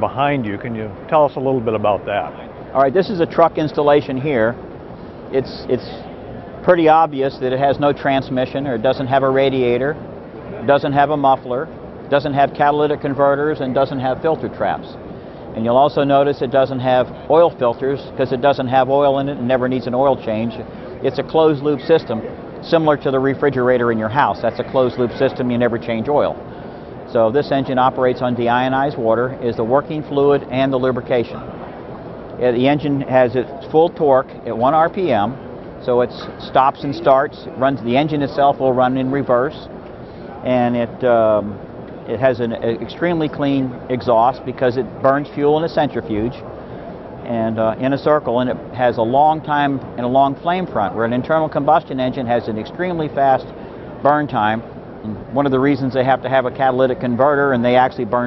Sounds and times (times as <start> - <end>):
Speech: 0.0 - 4.6, 5.3 - 15.0, 15.6 - 26.4, 27.1 - 31.5, 32.4 - 39.7, 40.4 - 46.4, 47.2 - 58.2.